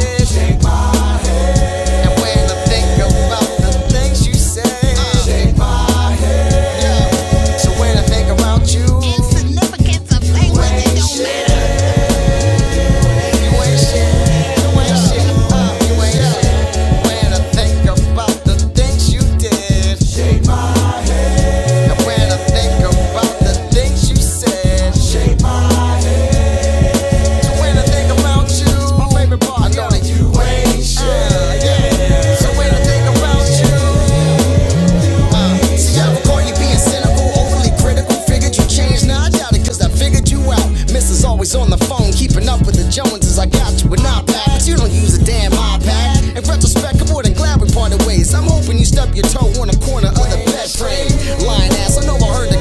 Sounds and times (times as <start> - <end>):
Music: 0.0 - 52.6.